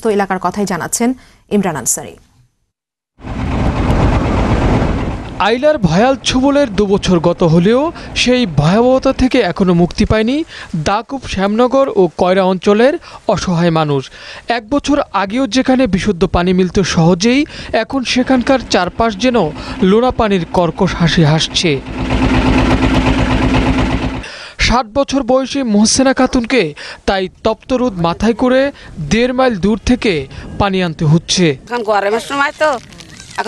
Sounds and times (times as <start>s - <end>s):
Speech: 5.4s - 21.8s, 24.6s - 33.4s.